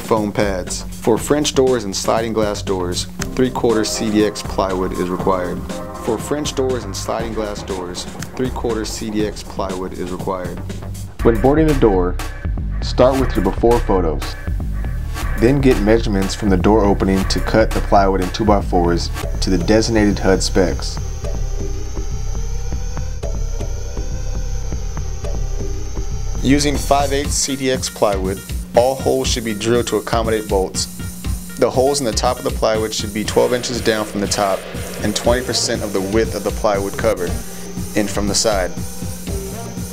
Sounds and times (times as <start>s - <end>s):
Speech: 0.0s - 10.6s, 11.2s - 12.2s, 12.8s - 14.4s, 15.3s - 21.0s, 26.4s - 30.9s, 31.6s - 38.8s
Music: 0.0s - 39.9s.